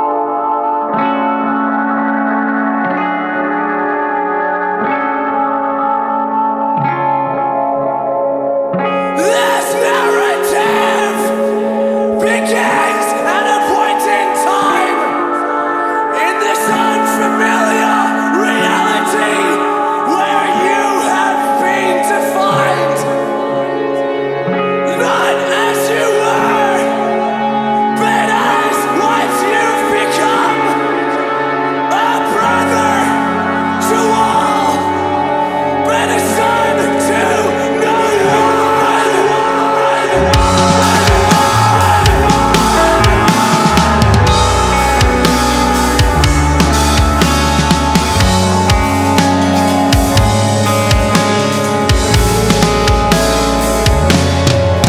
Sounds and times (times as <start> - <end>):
Music: 0.0 - 54.8.